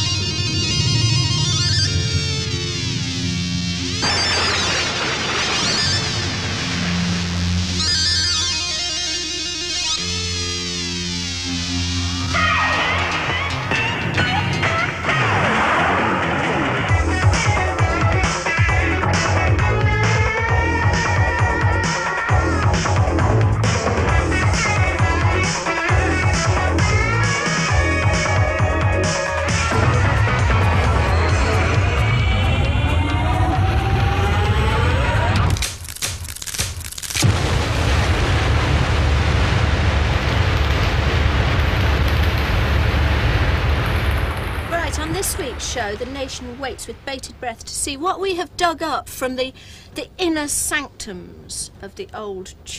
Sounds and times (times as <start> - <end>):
Theme music: 0.0 - 15.4, 16.3 - 35.6
Happy music: 9.8 - 34.2
New-age music: 17.0 - 34.8
Dance music: 20.9 - 35.4.